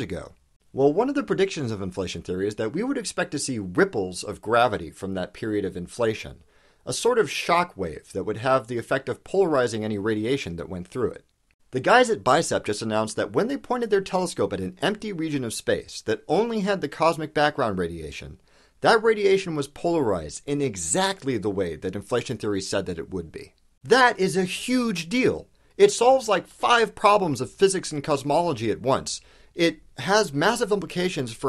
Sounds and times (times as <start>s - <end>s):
Speech: 0.0s - 31.4s.